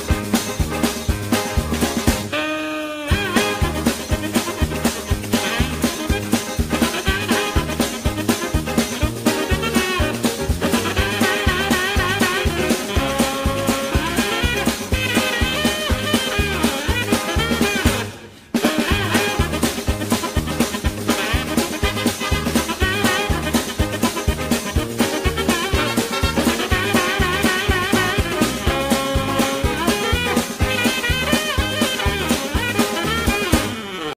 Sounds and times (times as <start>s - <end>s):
Music: 0.0s - 34.1s.